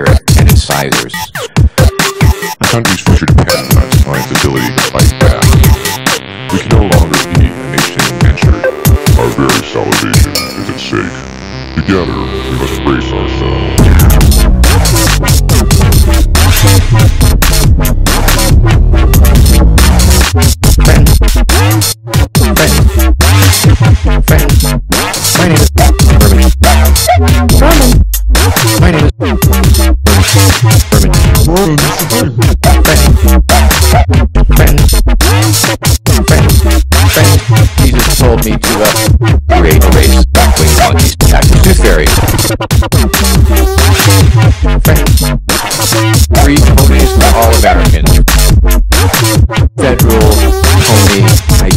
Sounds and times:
Dubstep: 0:00.0 - 0:51.7.

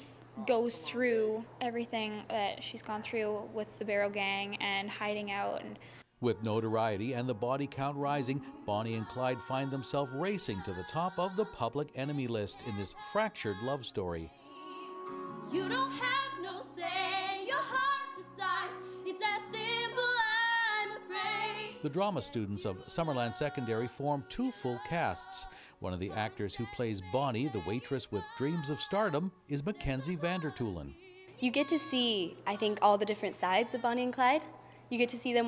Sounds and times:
Female speech, woman speaking: 0:00.4 - 0:05.8, 0:31.4 - 0:35.4.

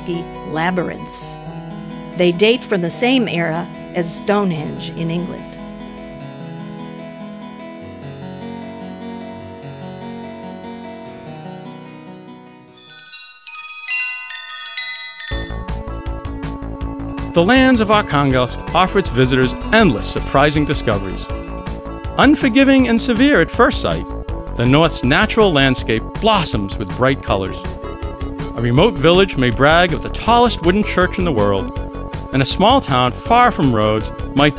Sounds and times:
Speech: 0:00.0 - 0:01.4, 0:02.2 - 0:05.6, 0:17.4 - 0:21.3, 0:22.2 - 0:24.0, 0:24.6 - 0:27.6, 0:28.6 - 0:31.7, 0:32.4 - 0:34.5
Harpsichord: 0:00.2 - 0:34.5.

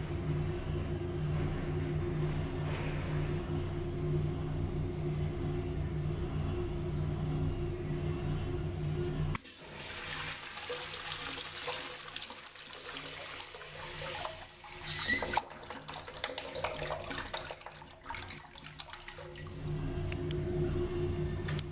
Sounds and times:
Toilet flush: 0:09.4 - 0:20.1.

